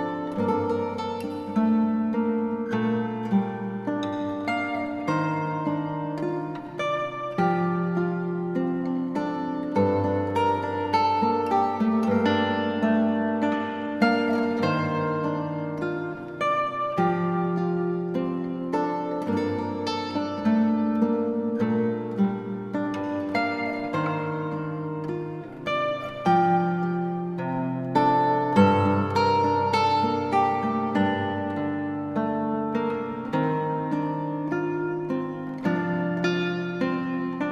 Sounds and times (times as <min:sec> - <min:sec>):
Guitar: 0:00.0 - 0:37.5.